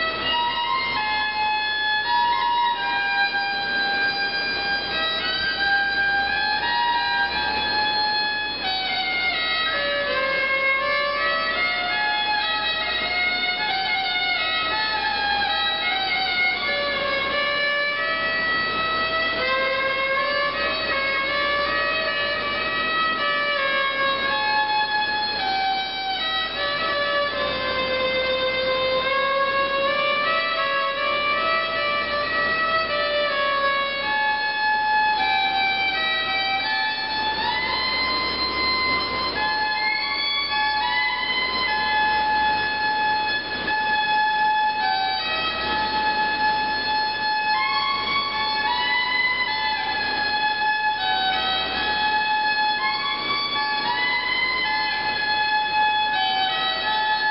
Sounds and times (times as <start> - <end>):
Violin, fiddle: 0.0 - 57.3.